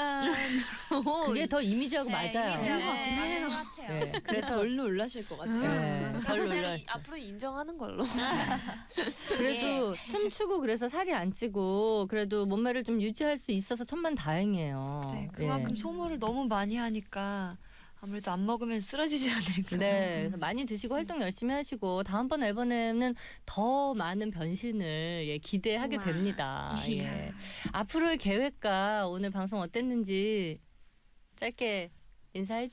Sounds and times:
Speech: 0:13.8 - 0:17.2, 0:25.6 - 0:30.6.

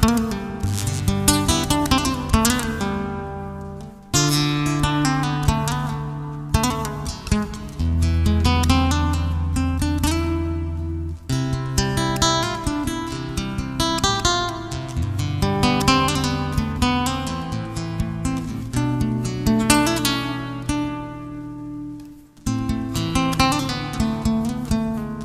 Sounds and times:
Strum: 0:00.0 - 0:25.2.

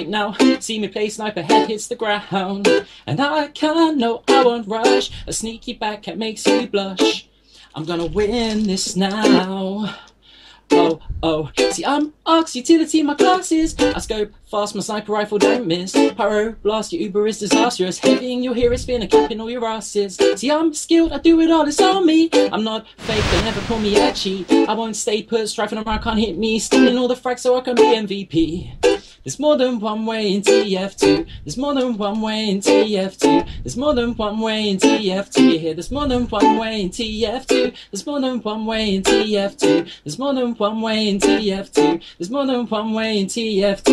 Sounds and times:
Music: 0:00.0 - 0:09.7, 0:10.6 - 0:43.9.

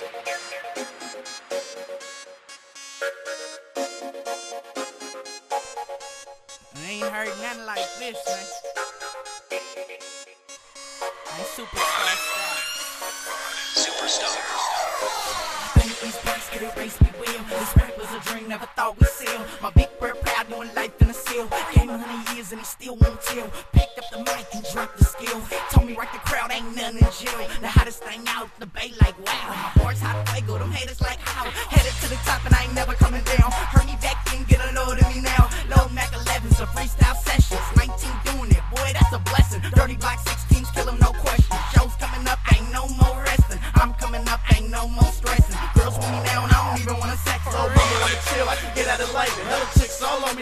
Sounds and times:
Background music: 0:00.0 - 0:50.4.

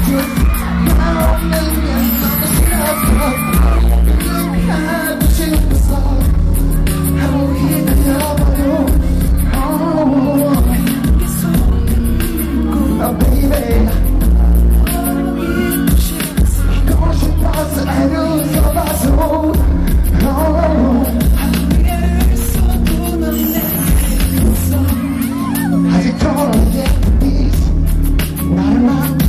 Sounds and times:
Dance music: 0:00.0 - 0:29.2.

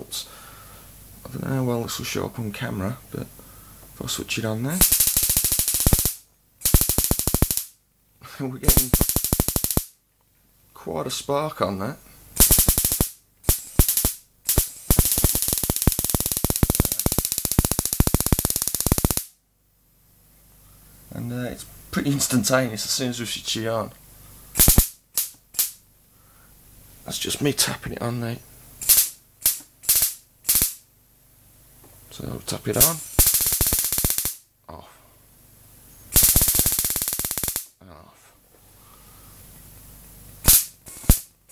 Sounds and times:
Inside, small room: 0:00.0 - 0:41.5
Speech: 0:01.2 - 0:03.3, 0:04.0 - 0:04.8, 0:08.2 - 0:09.0, 0:10.7 - 0:12.1, 0:21.1 - 0:24.0, 0:27.0 - 0:28.5, 0:32.1 - 0:33.1, 0:34.7 - 0:35.1, 0:37.8 - 0:38.4.

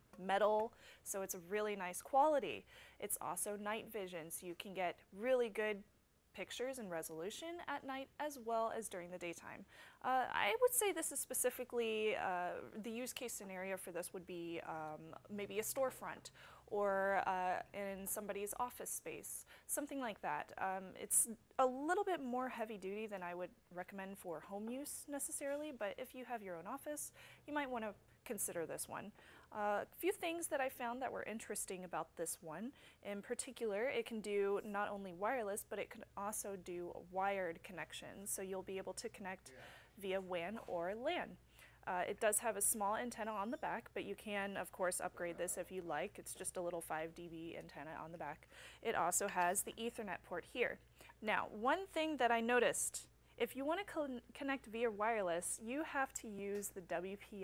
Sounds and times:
Speech: 0:00.2 - 0:57.4.

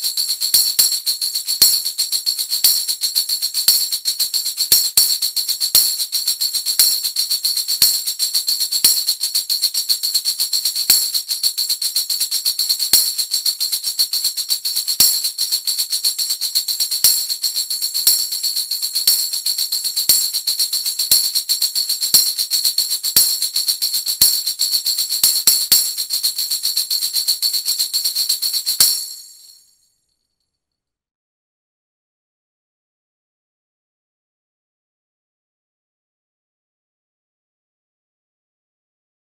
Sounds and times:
Music: 0:00.0 - 0:30.5.

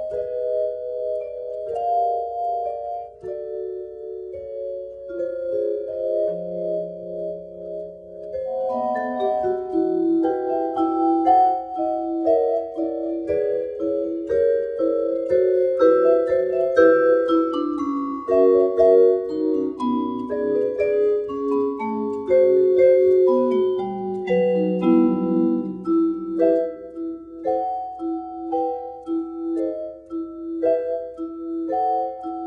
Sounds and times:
Vibraphone: 0:00.0 - 0:32.4.

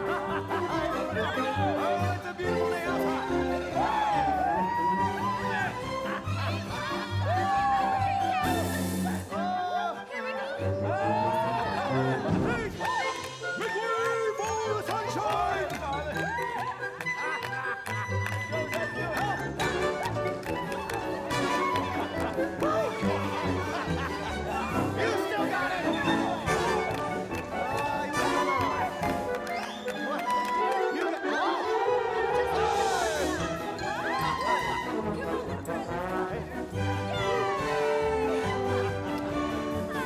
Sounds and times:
Music: 0:00.0 - 0:40.0.

